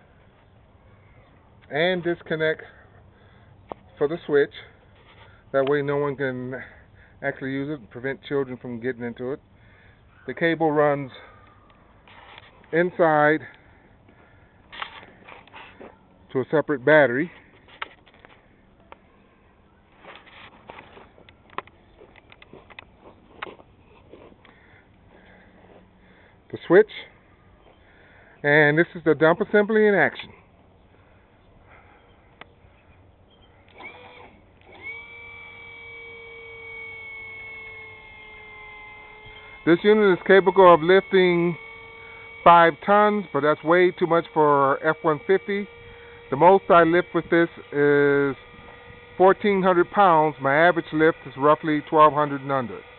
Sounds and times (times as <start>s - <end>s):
Speech: 5.6s - 9.4s, 39.7s - 41.6s, 42.5s - 45.7s, 46.4s - 48.4s, 49.2s - 52.8s.